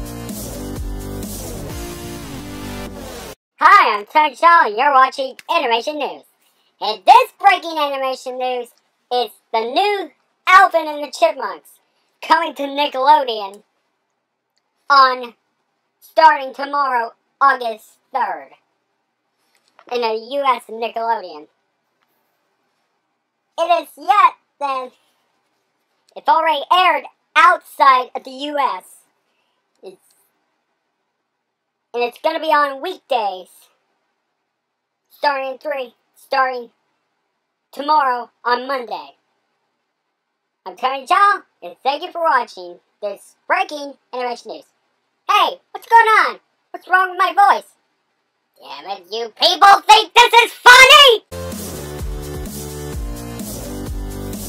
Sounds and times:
Speech: 3.6 - 13.6, 14.9 - 15.4, 16.0 - 18.6, 19.8 - 21.5, 23.6 - 25.0, 26.1 - 29.0, 29.8 - 30.1, 32.0 - 33.7, 35.1 - 36.8, 37.7 - 39.2, 40.7 - 44.7, 45.3 - 47.7, 48.6 - 51.3.

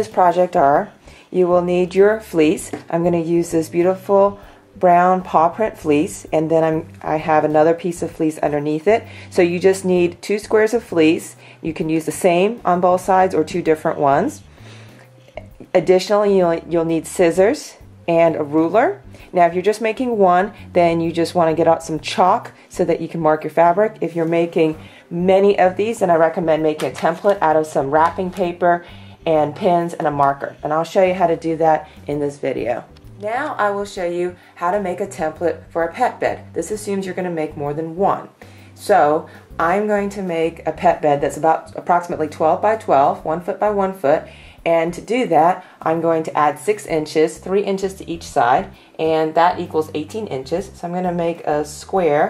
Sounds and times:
Speech: 0.0 - 14.4, 15.4 - 52.3
Music: 0.0 - 52.3.

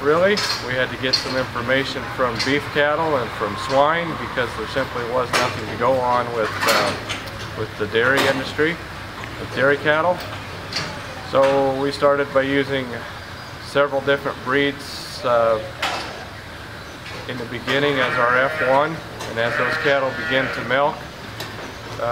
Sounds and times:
Speech: 0.0 - 7.0, 7.6 - 8.8.

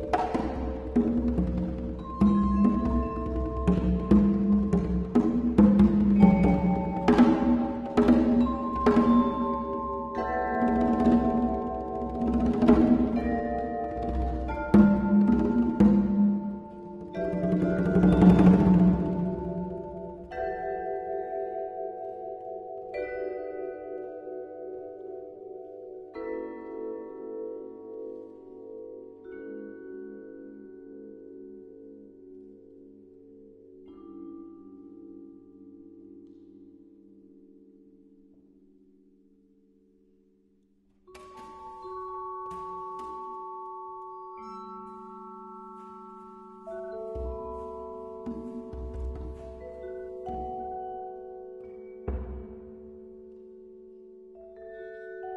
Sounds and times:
Vibraphone: 0.0 - 39.1, 41.1 - 55.3.

